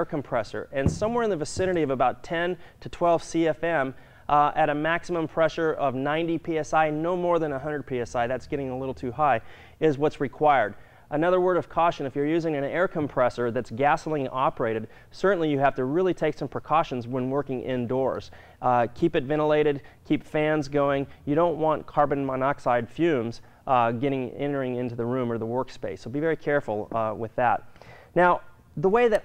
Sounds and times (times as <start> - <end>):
Speech: 0.0 - 27.6, 28.2 - 29.2.